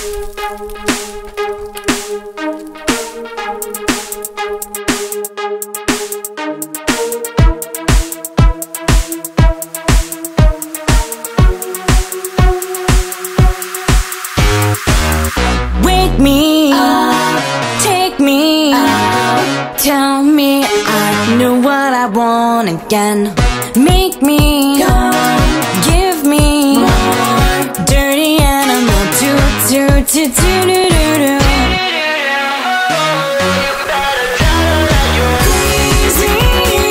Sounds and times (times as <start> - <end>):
Music: 0.0 - 36.9.